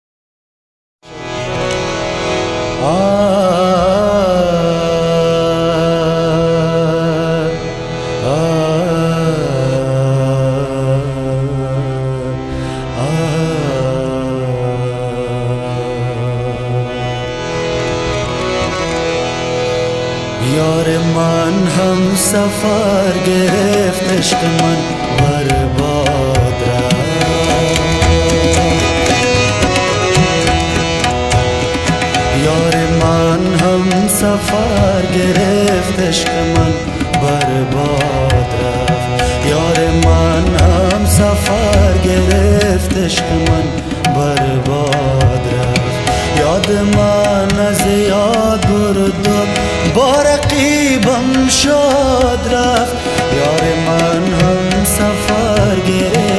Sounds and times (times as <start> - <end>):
Carnatic music: 1.0 - 56.3.